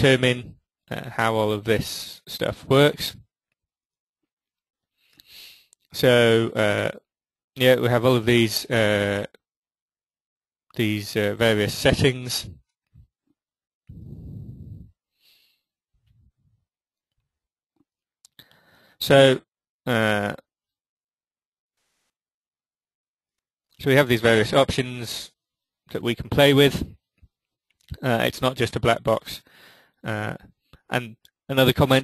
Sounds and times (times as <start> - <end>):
Speech: 0.0 - 3.2, 6.0 - 7.0, 7.6 - 9.4, 10.8 - 12.6, 19.0 - 20.4, 23.8 - 25.3, 25.9 - 27.0, 27.9 - 32.0.